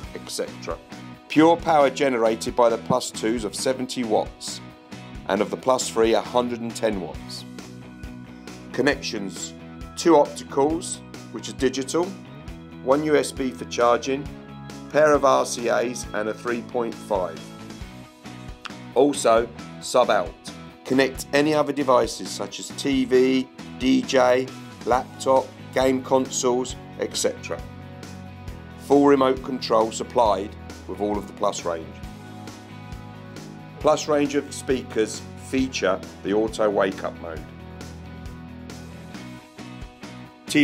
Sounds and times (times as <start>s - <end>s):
Speech: 0.0s - 4.6s, 5.3s - 7.5s, 8.7s - 12.2s, 12.8s - 14.3s, 14.9s - 17.5s, 19.0s - 27.7s, 28.8s - 32.0s, 33.8s - 37.4s
Music: 0.0s - 40.6s.